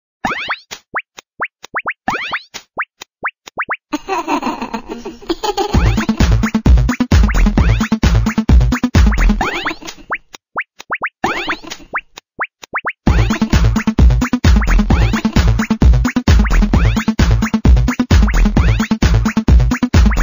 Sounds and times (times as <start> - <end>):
Music: 5.7 - 9.6, 13.1 - 20.2.